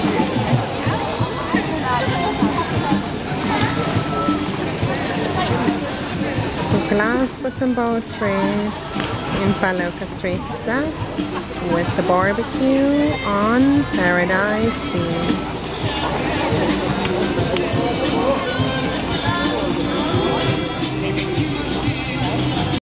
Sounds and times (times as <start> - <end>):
Speech: 0.0 - 8.8, 9.4 - 18.4
Music: 0.0 - 22.8.